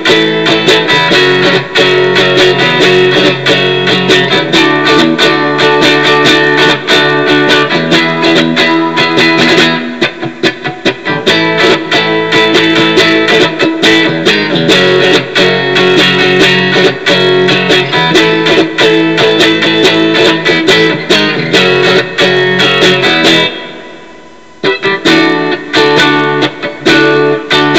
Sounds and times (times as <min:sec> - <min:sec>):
Strum: 0:00.0 - 0:27.7.